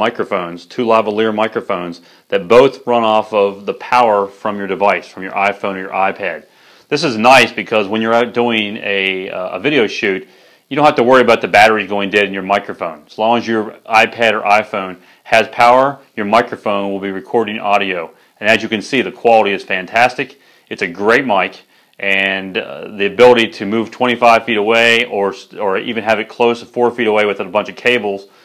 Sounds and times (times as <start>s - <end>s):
Speech: 0.0s - 28.3s.